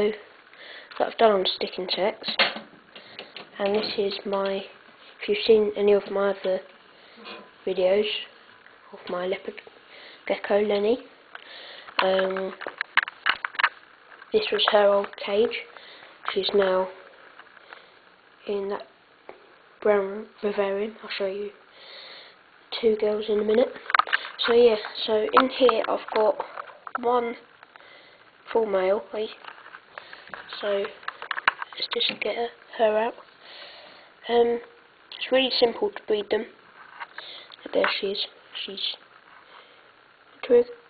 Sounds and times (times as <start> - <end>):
Speech: 0.0 - 0.3, 1.0 - 2.5, 3.6 - 6.7, 7.6 - 8.3, 8.9 - 9.7, 10.3 - 11.1, 12.0 - 12.6, 14.3 - 17.0, 18.4 - 18.9, 19.8 - 21.6, 22.7 - 23.8, 24.4 - 27.5, 28.5 - 29.4, 30.5 - 31.0, 31.8 - 33.2, 34.2 - 36.6, 37.6 - 39.0, 40.4 - 40.8.